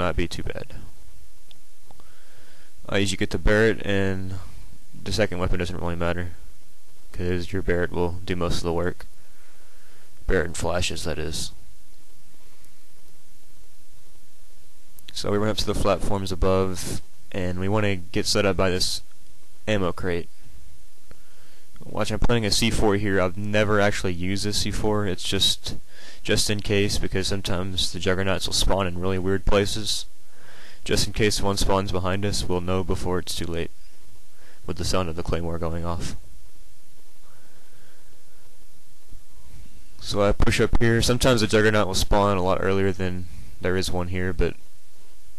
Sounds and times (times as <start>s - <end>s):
Speech: 0.0s - 0.9s, 2.9s - 6.4s, 7.1s - 9.1s, 10.3s - 11.6s, 15.1s - 19.1s, 19.7s - 20.3s, 21.8s - 30.1s, 30.8s - 33.7s, 34.7s - 36.2s, 40.0s - 44.6s.